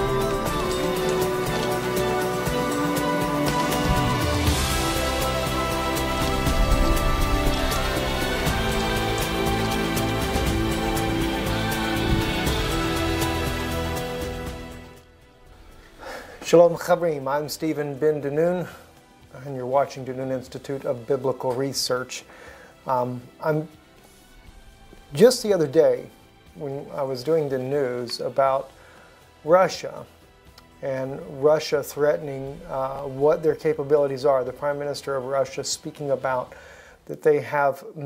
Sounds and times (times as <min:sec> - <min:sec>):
Music: 0:00.0 - 0:38.0
Speech: 0:16.4 - 0:22.3, 0:22.9 - 0:23.7, 0:25.1 - 0:28.7, 0:29.4 - 0:30.1, 0:30.8 - 0:38.0.